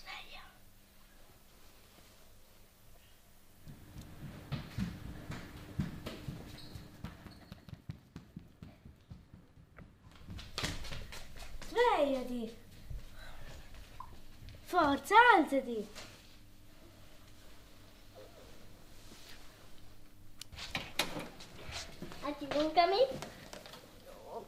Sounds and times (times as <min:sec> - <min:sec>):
Speech: 0:11.7 - 0:12.6, 0:14.7 - 0:16.0, 0:22.2 - 0:23.2.